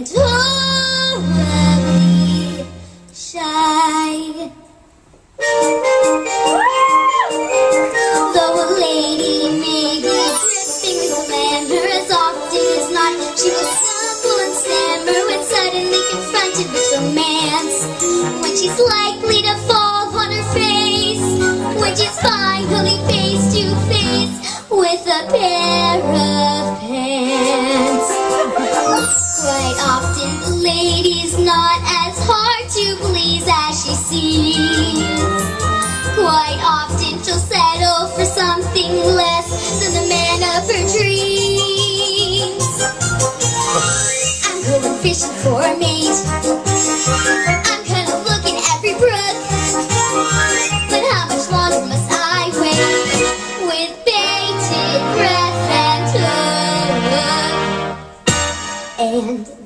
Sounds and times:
Music: 0.0 - 59.6
Female singing: 8.3 - 17.8, 21.8 - 28.2, 29.4 - 35.3, 36.2 - 42.6, 44.4 - 46.2, 50.9 - 53.0.

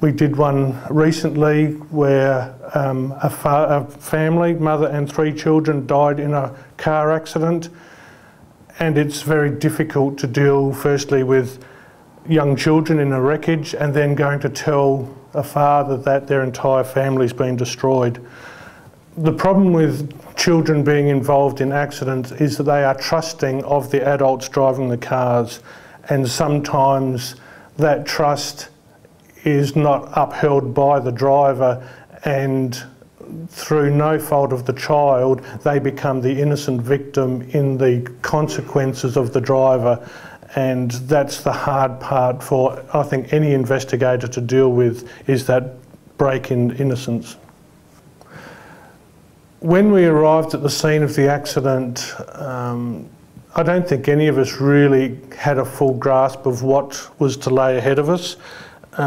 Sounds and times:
Speech: 0.0 - 7.8, 8.7 - 11.6, 12.2 - 18.3, 19.2 - 47.4, 49.6 - 59.0.

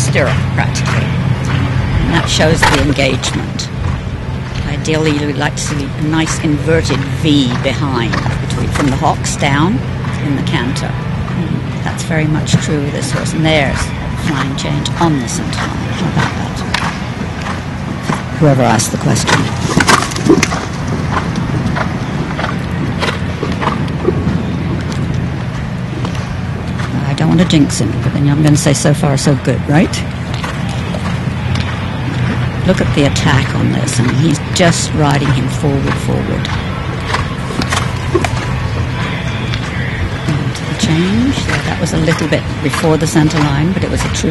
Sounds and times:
Speech: 0.0 - 1.2, 2.0 - 3.7, 4.6 - 16.7, 18.4 - 19.6, 27.0 - 30.1, 32.6 - 36.5, 39.0 - 44.3
Outside, urban or manmade: 0.0 - 44.3
Horse: 0.1 - 44.3.

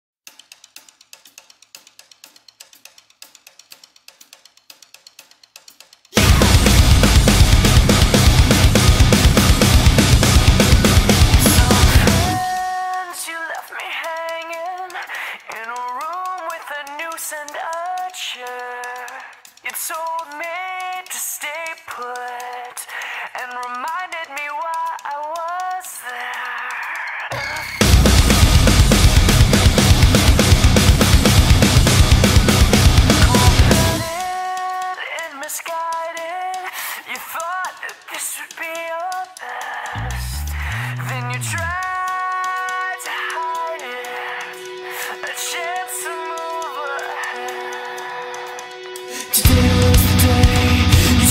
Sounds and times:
Hip hop music: 6.2 - 15.1, 27.2 - 51.3.

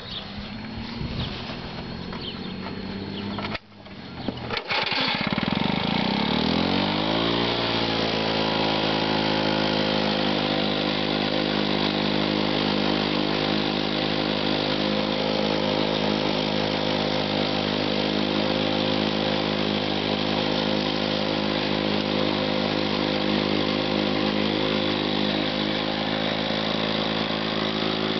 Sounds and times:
Power tool: 0.0 - 28.1.

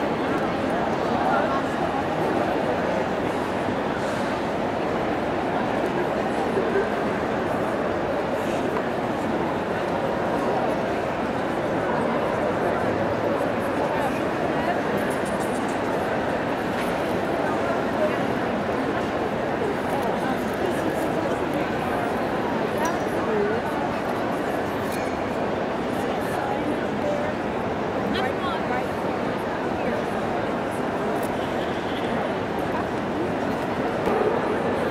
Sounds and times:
Speech: 0.0 - 34.9.

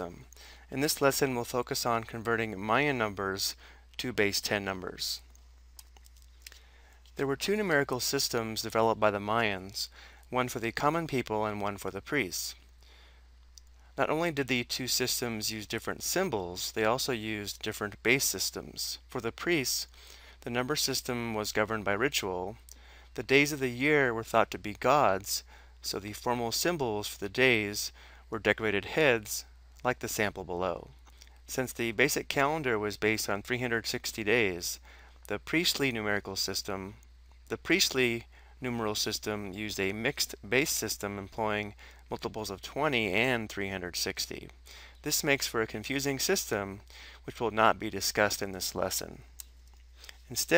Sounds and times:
Speech: 0.0 - 5.3, 7.2 - 12.6, 14.0 - 49.3, 50.3 - 50.5.

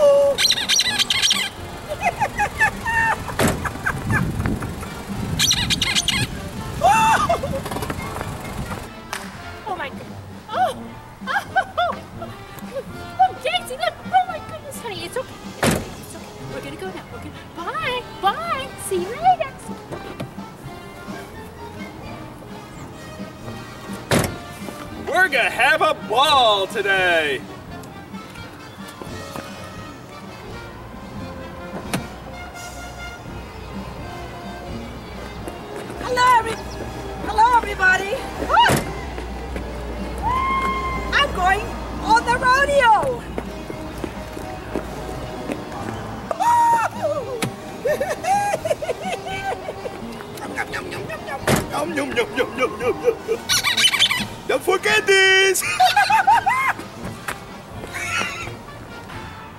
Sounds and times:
Music: 0.0 - 59.5.

